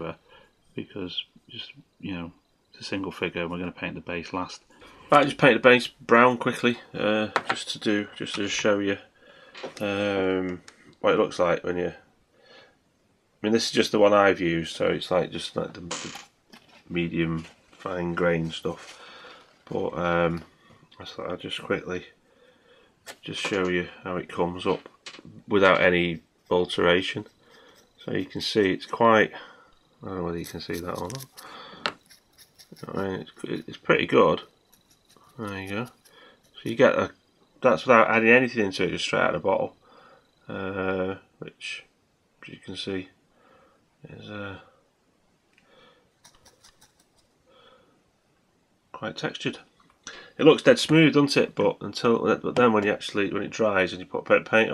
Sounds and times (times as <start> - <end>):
Speech: 0.0 - 0.2, 0.8 - 9.1, 9.8 - 12.0, 13.4 - 16.2, 16.9 - 18.9, 19.7 - 22.2, 23.2 - 27.3, 28.0 - 31.4, 32.8 - 34.5, 35.4 - 36.0, 36.6 - 39.8, 40.5 - 43.1, 44.0 - 44.7, 49.0 - 49.7, 50.4 - 54.7
Inside, small room: 0.0 - 54.7.